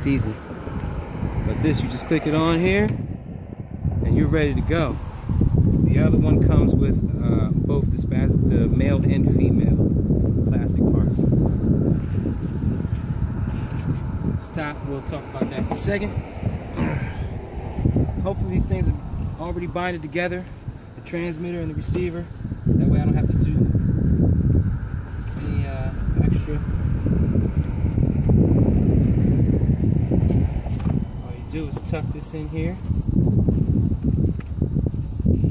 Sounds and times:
Wind: 0:00.0 - 0:35.5.

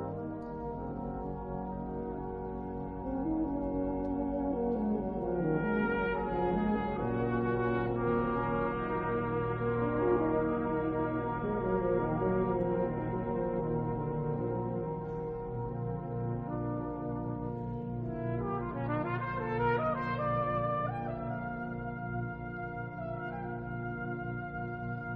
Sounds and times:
Classical music: 0:00.0 - 0:25.1
Orchestra: 0:00.0 - 0:25.1
Trombone: 0:00.0 - 0:25.1
Trumpet: 0:00.0 - 0:25.1.

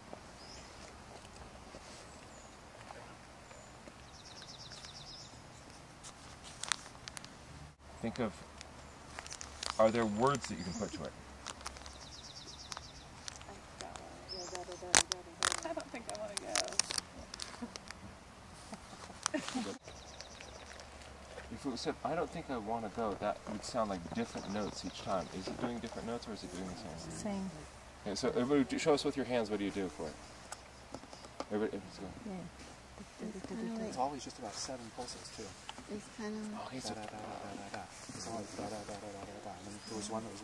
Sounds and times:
Outside, rural or natural: 0:00.0 - 0:40.4
Bird vocalization, bird call, bird song: 0:00.4 - 0:00.9, 0:02.0 - 0:05.9, 0:09.8 - 0:11.1, 0:11.8 - 0:13.6, 0:14.2 - 0:14.9, 0:19.8 - 0:20.9, 0:23.7 - 0:26.0, 0:39.6 - 0:40.4.

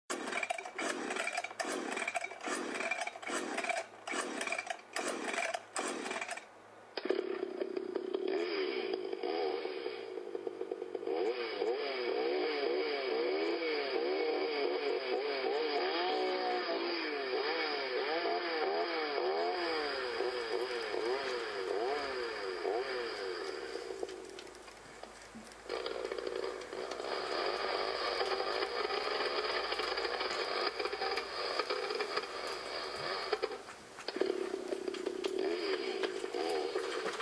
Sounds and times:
Chainsaw: 0:00.1 - 0:37.2.

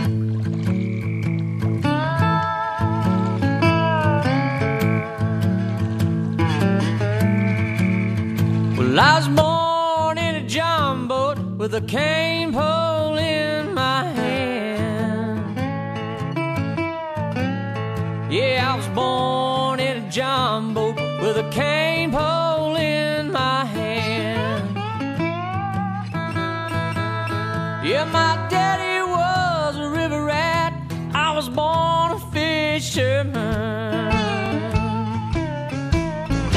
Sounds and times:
Blues: 0:00.0 - 0:36.5.

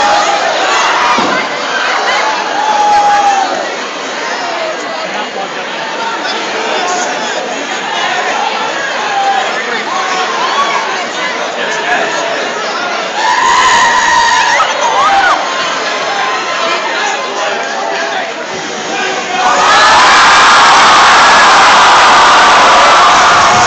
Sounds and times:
Cheering: 0:00.0 - 0:04.8, 0:05.8 - 0:23.6
Crowd: 0:00.0 - 0:23.6.

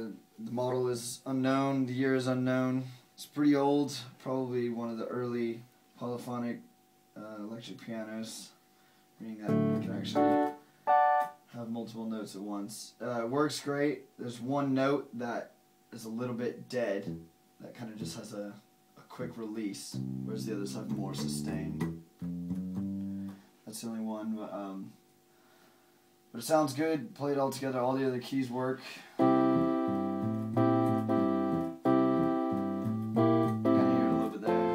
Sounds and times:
Speech: 0:00.0 - 0:08.6, 0:09.2 - 0:10.2, 0:11.5 - 0:21.9, 0:23.7 - 0:25.0, 0:26.3 - 0:29.1, 0:33.8 - 0:34.7
Piano: 0:09.5 - 0:11.4, 0:29.2 - 0:34.7.

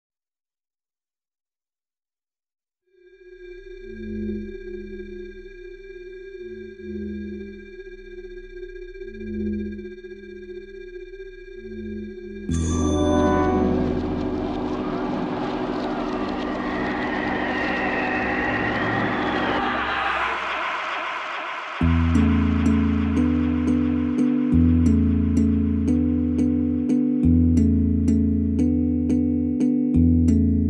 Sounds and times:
Music: 0:02.9 - 0:30.6.

